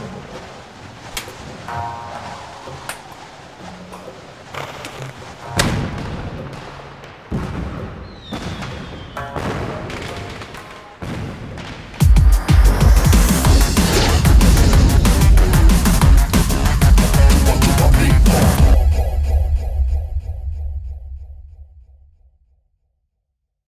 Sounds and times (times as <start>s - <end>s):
Music: 1.7s - 7.5s, 9.2s - 11.3s, 12.0s - 22.2s.